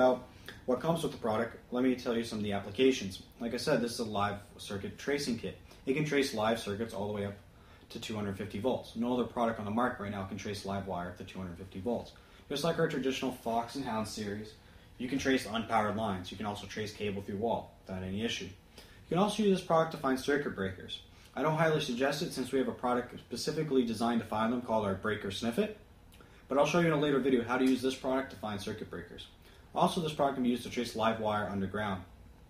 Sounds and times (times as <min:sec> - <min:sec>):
Speech: 0:00.0 - 0:25.8, 0:26.5 - 0:32.1.